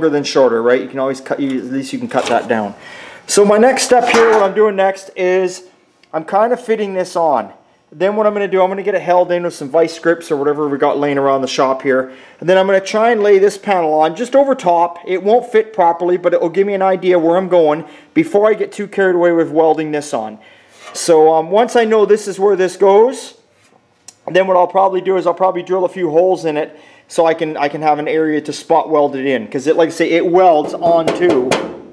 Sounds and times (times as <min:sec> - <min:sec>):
Speech: 0:00.0 - 0:23.5, 0:24.1 - 0:31.6.